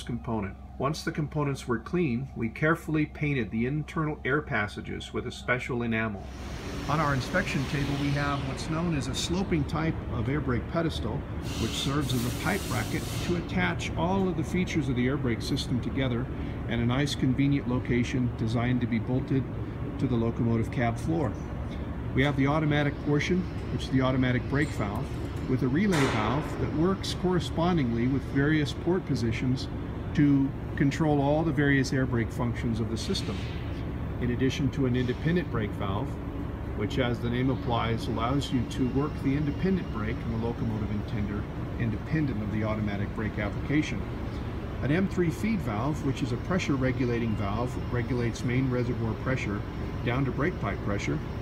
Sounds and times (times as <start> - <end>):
Speech: 0.0 - 21.4, 22.2 - 33.5, 34.2 - 36.2, 36.8 - 44.1, 44.8 - 51.3.